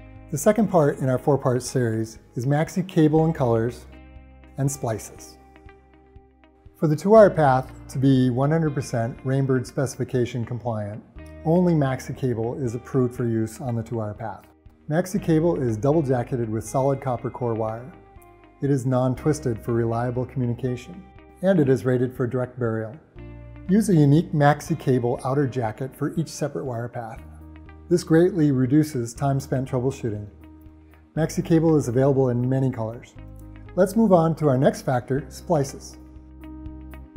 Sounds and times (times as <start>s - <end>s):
Music: 0.0s - 37.1s
Speech: 0.3s - 3.9s, 4.6s - 5.4s, 6.8s - 18.0s, 18.6s - 23.1s, 23.7s - 27.2s, 27.9s - 30.4s, 31.2s - 33.2s, 33.8s - 36.0s.